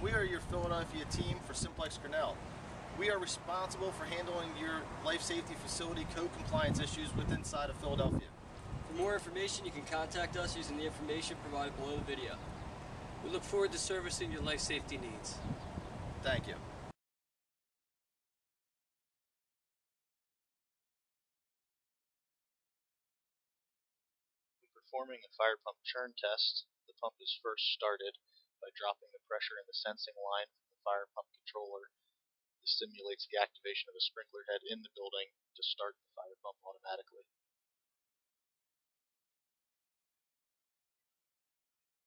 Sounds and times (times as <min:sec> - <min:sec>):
Speech: 0:00.0 - 0:02.4, 0:03.0 - 0:08.3, 0:08.9 - 0:12.4, 0:13.3 - 0:15.4, 0:16.2 - 0:16.6, 0:24.8 - 0:31.9, 0:32.7 - 0:37.3.